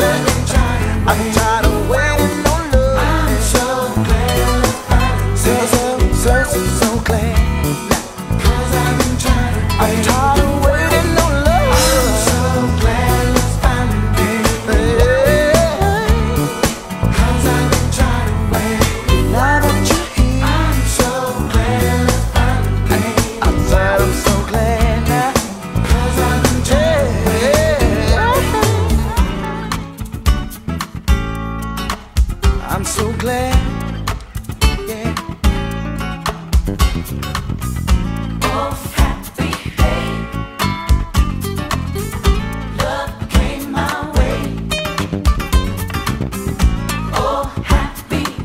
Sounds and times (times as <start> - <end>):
Rhythm and blues: 0.0 - 48.4.